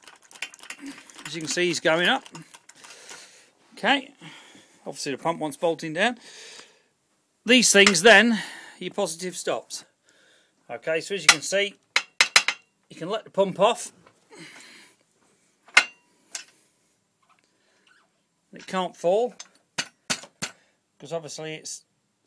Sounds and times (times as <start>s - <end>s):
Speech: 3.8s - 4.2s, 4.9s - 6.2s, 7.5s - 9.9s, 10.7s - 11.8s, 12.9s - 14.0s, 18.5s - 19.4s, 21.0s - 21.9s.